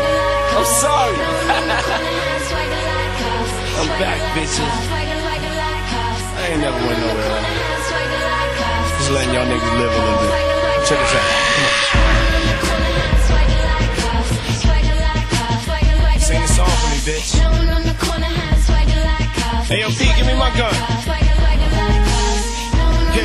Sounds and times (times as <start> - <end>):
Music: 0.0 - 23.2
Speech: 3.8 - 4.8, 6.4 - 7.5, 9.0 - 12.0, 16.2 - 17.4, 19.7 - 20.9.